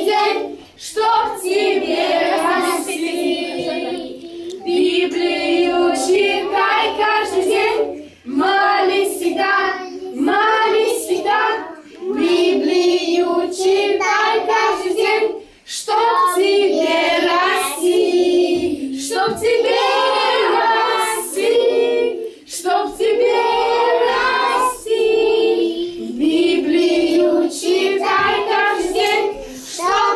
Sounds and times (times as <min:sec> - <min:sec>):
Child singing: 0:00.0 - 0:30.1
Choir: 0:00.0 - 0:30.1.